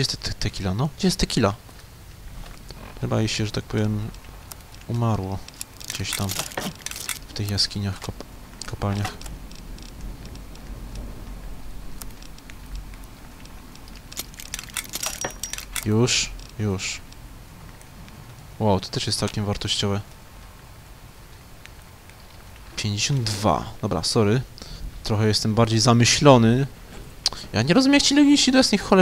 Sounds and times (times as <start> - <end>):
Speech: 0.0 - 1.6, 3.0 - 4.1, 4.9 - 5.4, 7.3 - 9.2, 15.8 - 17.0, 18.6 - 20.0, 22.8 - 26.7, 27.5 - 29.0.